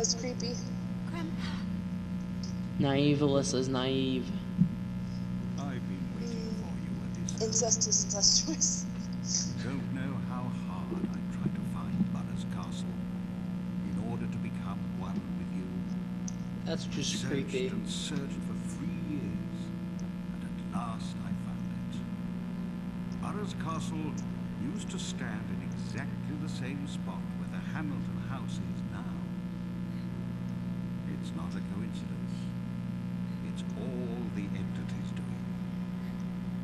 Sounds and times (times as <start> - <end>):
Speech: 0.0 - 1.7, 2.4 - 4.4, 5.6 - 13.0, 13.8 - 15.9, 16.7 - 19.7, 20.4 - 22.0, 23.2 - 29.3, 31.1 - 32.5, 33.4 - 35.5.